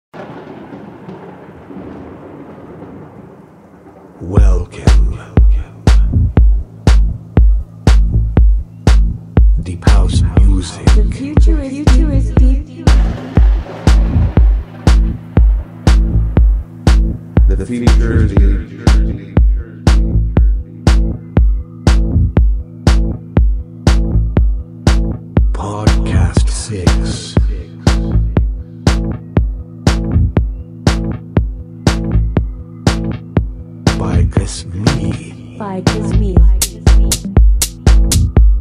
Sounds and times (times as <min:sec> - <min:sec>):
House music: 0:04.9 - 0:32.2, 0:32.9 - 0:38.6.